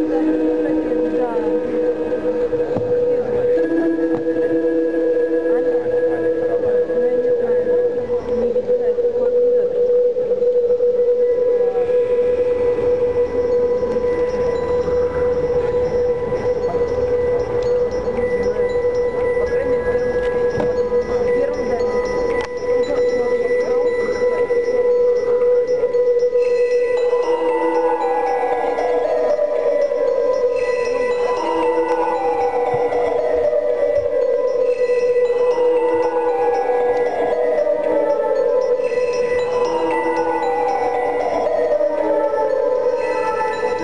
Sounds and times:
Speech: 0:00.0 - 0:10.5, 0:18.1 - 0:26.0
Music: 0:00.0 - 0:43.8.

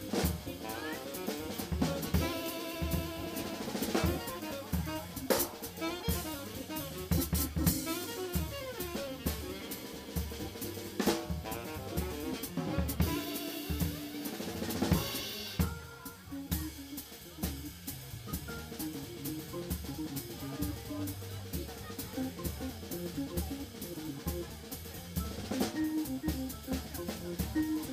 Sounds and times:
Music: 0:00.0 - 0:27.9
Speech: 0:00.0 - 0:27.9.

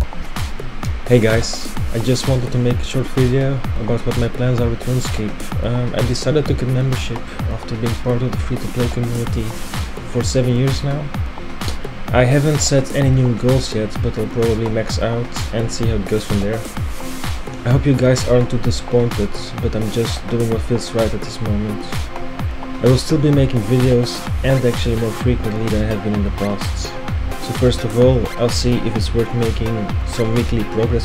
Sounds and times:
Music: 0:00.0 - 0:31.0
Speech: 0:01.1 - 0:11.1, 0:12.1 - 0:16.7, 0:17.6 - 0:22.0, 0:22.8 - 0:31.0.

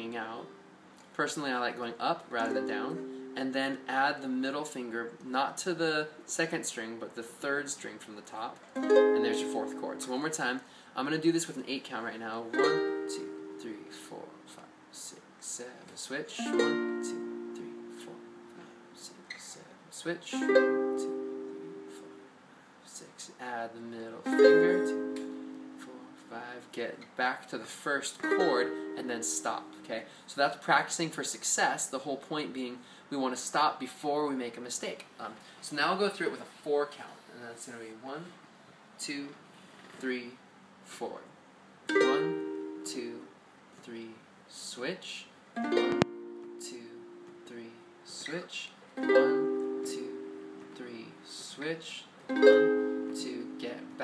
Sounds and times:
Speech: 0:00.0 - 0:08.6, 0:09.2 - 0:18.2, 0:19.0 - 0:21.1, 0:22.8 - 0:25.0, 0:25.8 - 0:38.4, 0:39.0 - 0:39.4, 0:40.0 - 0:41.4, 0:42.0 - 0:45.4, 0:46.6 - 0:50.2, 0:50.8 - 0:52.1, 0:53.2 - 0:54.0
Ukulele: 0:02.3 - 0:03.8, 0:08.6 - 0:10.2, 0:12.4 - 0:14.6, 0:16.4 - 0:18.9, 0:20.3 - 0:22.3, 0:24.2 - 0:26.5, 0:28.2 - 0:29.9, 0:41.9 - 0:43.2, 0:45.6 - 0:47.9, 0:49.0 - 0:51.3, 0:52.3 - 0:54.0.

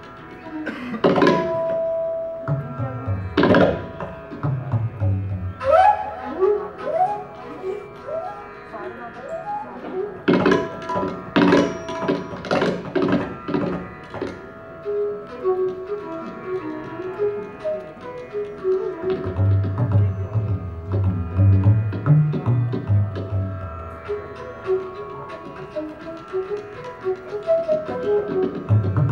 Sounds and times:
Tabla: 0:00.0 - 0:29.1.

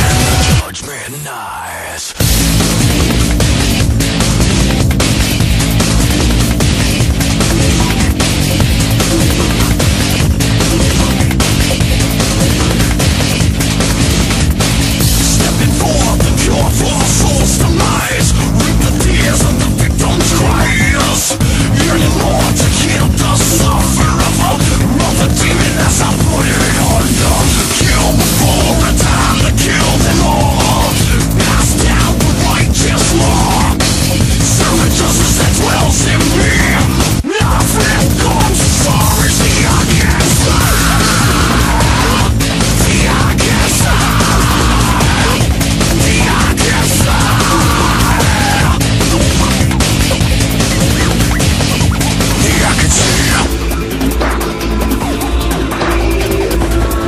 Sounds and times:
Angry music: 0:00.0 - 0:57.0.

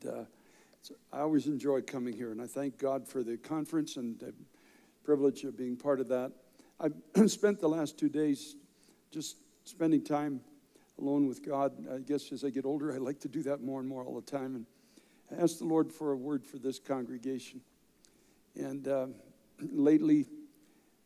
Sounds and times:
Speech: 0:00.0 - 0:04.4, 0:05.1 - 0:08.6, 0:09.2 - 0:14.7, 0:15.3 - 0:17.6, 0:18.6 - 0:20.4.

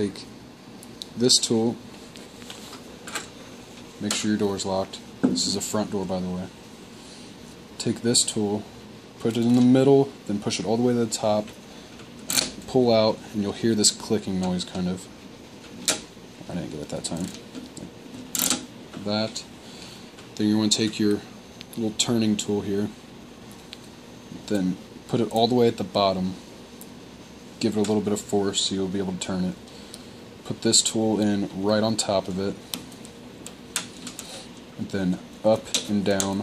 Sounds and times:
Speech: 0:00.0 - 0:00.3, 0:01.2 - 0:01.8, 0:04.0 - 0:06.6, 0:07.8 - 0:11.5, 0:12.6 - 0:15.1, 0:16.5 - 0:17.4, 0:19.0 - 0:19.5, 0:20.4 - 0:23.0, 0:24.4 - 0:26.4, 0:27.6 - 0:29.6, 0:30.4 - 0:32.6, 0:34.8 - 0:36.4.

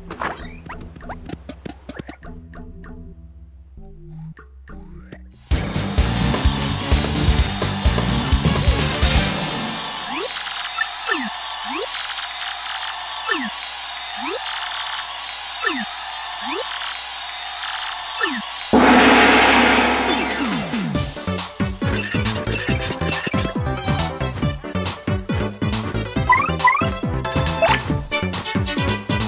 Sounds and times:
Music: 0:00.1 - 0:10.1, 0:18.8 - 0:29.2.

